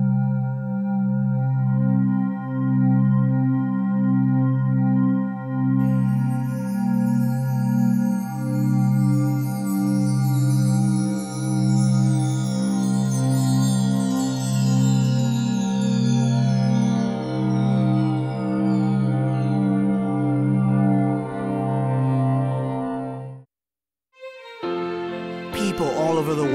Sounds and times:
Music: 0.0s - 23.5s, 24.1s - 26.5s.

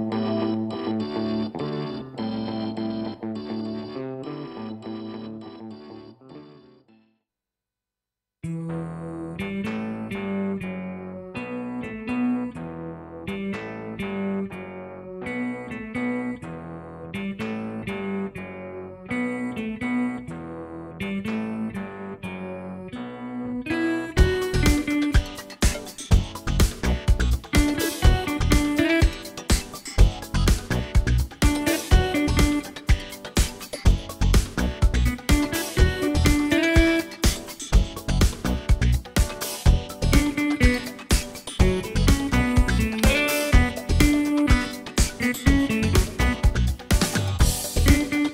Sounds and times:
Music: 0.0s - 7.2s, 8.4s - 48.3s.

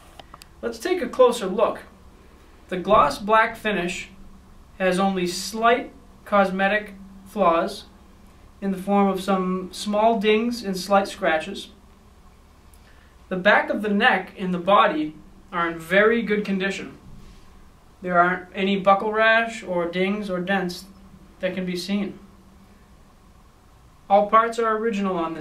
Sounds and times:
Speech: 0.6s - 1.9s, 2.7s - 4.2s, 4.8s - 7.9s, 8.6s - 11.8s, 13.3s - 17.0s, 18.0s - 22.2s, 24.1s - 25.4s.

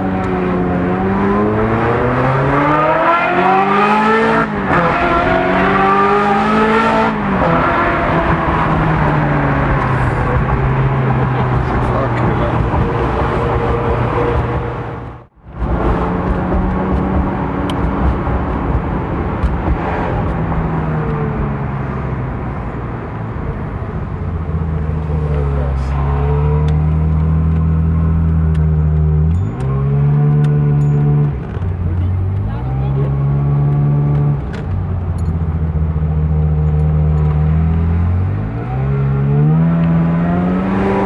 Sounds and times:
Accelerating, revving, vroom: 0.0s - 15.0s, 25.0s - 31.4s, 32.2s - 34.4s, 36.2s - 41.0s
Car: 0.0s - 41.0s
Speech: 11.4s - 12.6s, 25.1s - 26.6s, 31.9s - 33.2s.

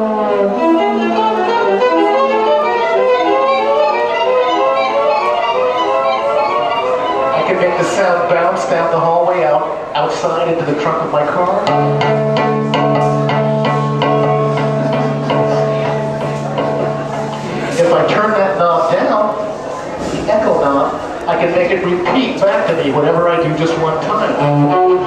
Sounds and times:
Musical instrument: 0.0s - 9.9s, 11.2s - 18.6s
Speech: 7.4s - 11.8s, 17.7s - 25.0s.

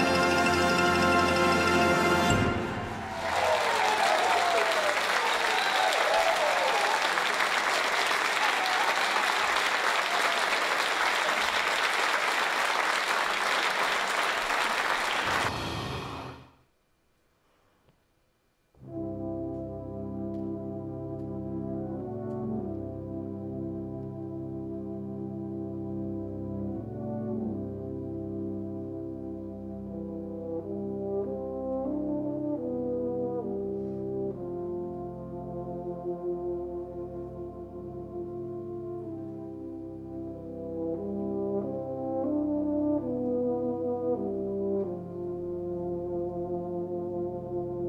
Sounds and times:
Applause: 2.8s - 15.5s.

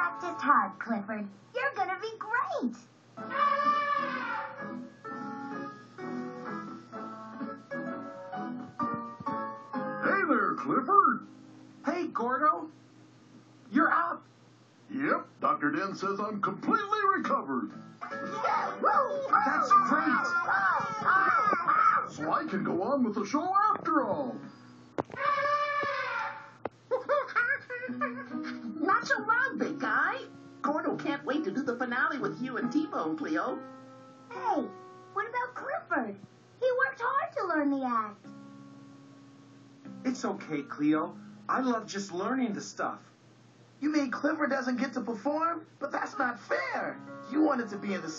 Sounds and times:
Music: 0.0s - 2.0s, 3.1s - 14.1s, 15.0s - 26.8s, 27.6s - 42.9s, 45.9s - 48.1s.

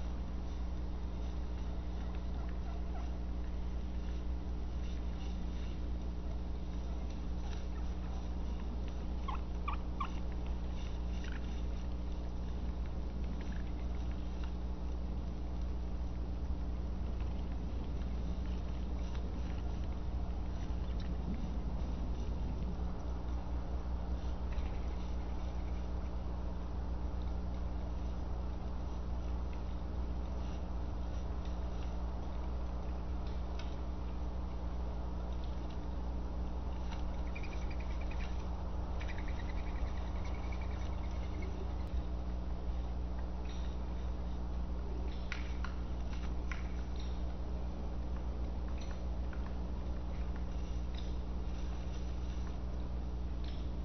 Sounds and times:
Gobble: 2.0s - 3.2s, 9.2s - 10.3s.

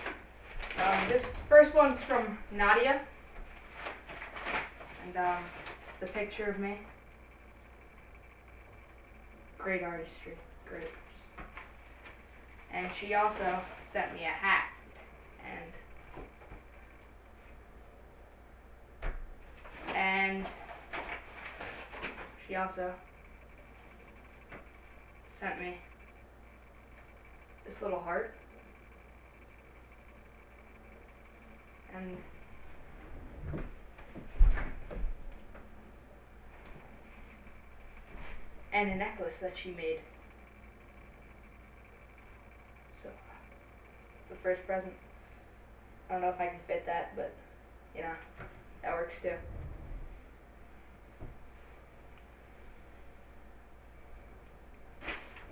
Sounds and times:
Speech: 0.8s - 3.1s, 5.0s - 6.9s, 9.6s - 11.4s, 12.7s - 14.8s, 15.4s - 15.8s, 20.0s - 20.6s, 22.4s - 23.0s, 25.3s - 25.9s, 27.7s - 28.4s, 38.8s - 40.1s, 44.3s - 45.0s, 46.1s - 49.5s.

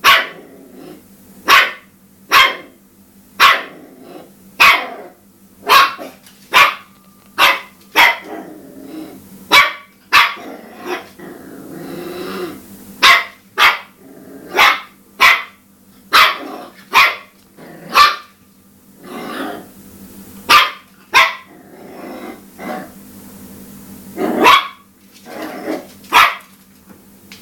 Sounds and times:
Bark: 0.0s - 0.4s, 1.5s - 2.8s, 3.4s - 3.8s, 4.6s - 5.0s, 5.6s - 8.3s, 9.5s - 11.1s, 13.0s - 14.0s, 14.6s - 17.3s, 17.9s - 18.3s, 20.5s - 21.5s, 24.3s - 24.9s, 26.1s - 26.6s
Bow-wow: 0.0s - 0.4s, 1.5s - 2.8s, 3.4s - 3.8s, 4.6s - 5.1s, 5.7s - 8.4s, 9.5s - 11.1s, 13.0s - 17.3s, 17.9s - 18.3s, 20.5s - 21.5s, 24.2s - 26.5s.

